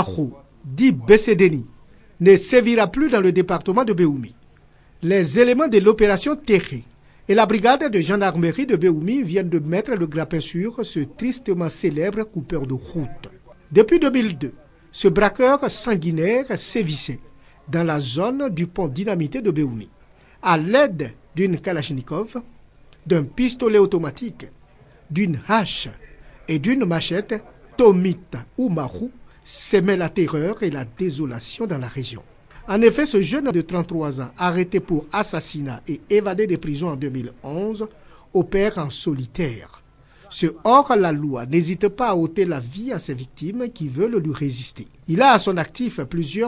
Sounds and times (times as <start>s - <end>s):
Speech: 0.0s - 4.4s, 5.0s - 46.4s.